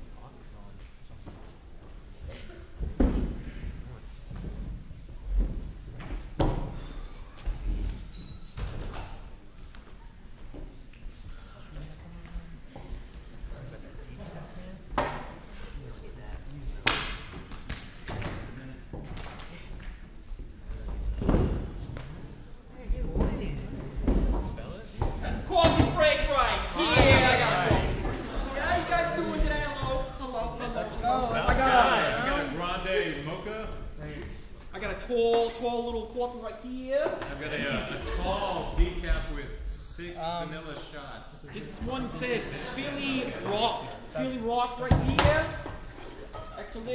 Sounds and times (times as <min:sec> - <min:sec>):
Speech: 0:22.5 - 0:45.6.